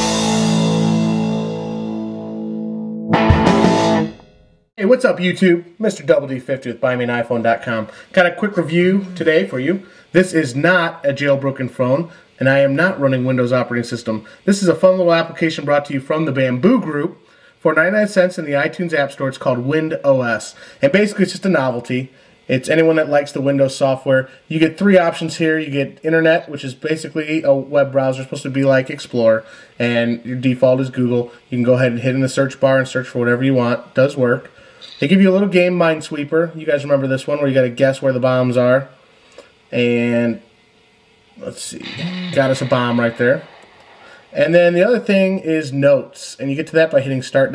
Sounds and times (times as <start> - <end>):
Speech: 4.8 - 39.0, 39.7 - 40.5, 41.4 - 43.5, 44.2 - 47.5.